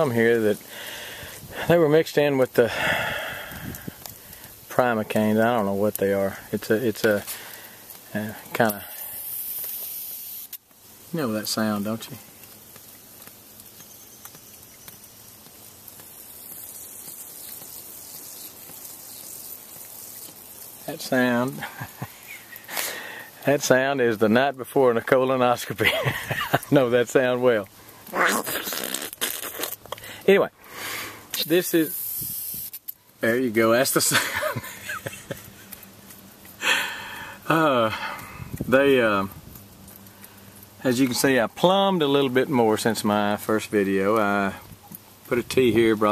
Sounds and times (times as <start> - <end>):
Speech: 0.0 - 0.6, 1.7 - 2.7, 4.7 - 7.3, 8.1 - 8.9, 11.1 - 12.2, 20.9 - 21.6, 23.4 - 25.9, 26.7 - 27.7, 30.3 - 30.5, 31.4 - 31.9, 33.2 - 34.2, 37.5 - 38.0, 38.7 - 39.3, 40.8 - 44.6, 45.3 - 46.1
Spray: 6.4 - 23.4, 28.2 - 29.9, 30.8 - 33.0.